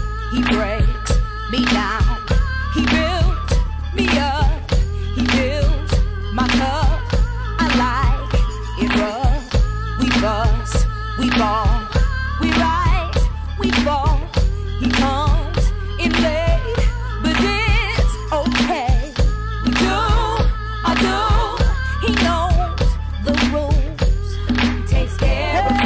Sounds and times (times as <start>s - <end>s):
Music: 0.0s - 25.8s.